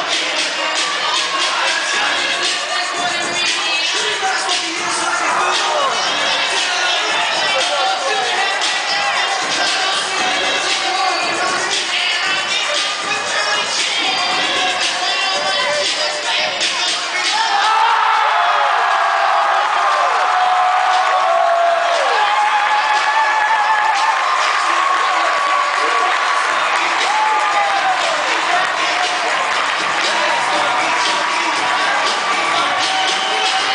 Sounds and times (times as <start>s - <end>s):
Music: 0.0s - 33.7s.